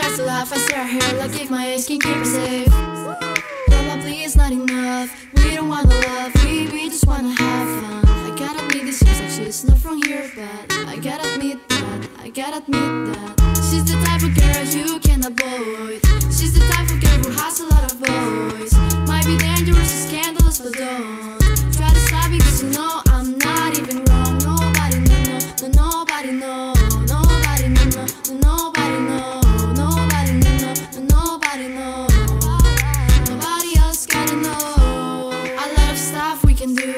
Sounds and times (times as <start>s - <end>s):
Music: 0.0s - 36.9s.